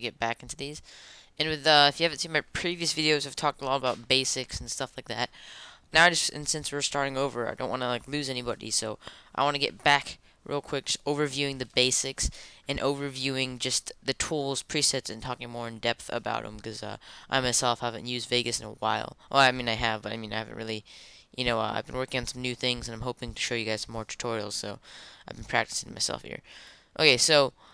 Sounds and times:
Speech: 0:00.0 - 0:00.8, 0:01.4 - 0:05.3, 0:05.9 - 0:20.8, 0:21.4 - 0:27.5.

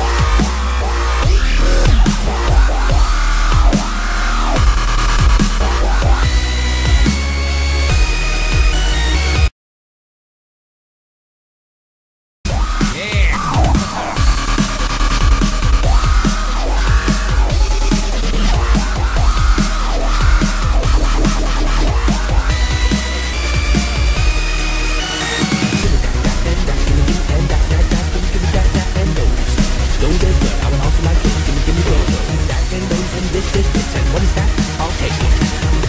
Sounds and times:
Dubstep: 0:00.0 - 0:09.5, 0:12.5 - 0:35.8.

